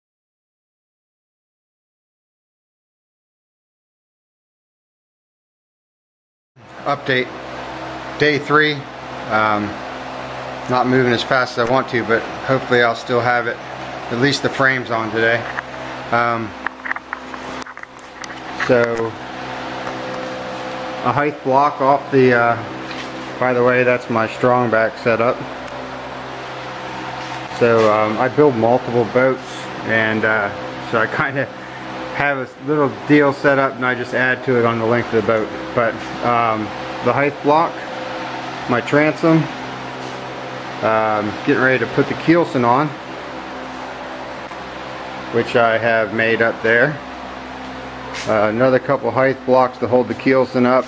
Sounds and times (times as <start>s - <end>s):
Speech: 6.8s - 7.4s, 8.2s - 9.8s, 10.6s - 16.6s, 18.6s - 19.2s, 21.0s - 22.7s, 23.4s - 25.5s, 27.5s - 31.6s, 32.2s - 37.9s, 38.7s - 39.6s, 40.8s - 43.0s, 45.3s - 47.0s, 48.2s - 50.8s.